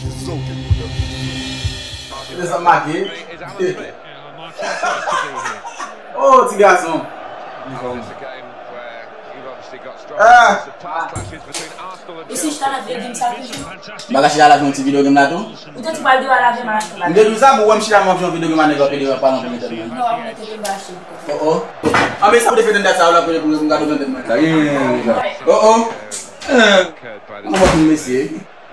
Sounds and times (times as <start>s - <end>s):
Speech: 2.1s - 28.5s.